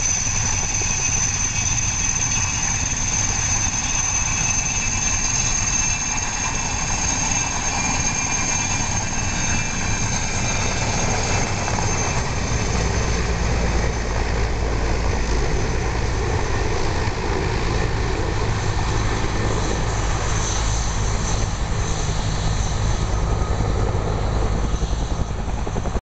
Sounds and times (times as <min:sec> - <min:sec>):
Helicopter: 0:00.0 - 0:26.0.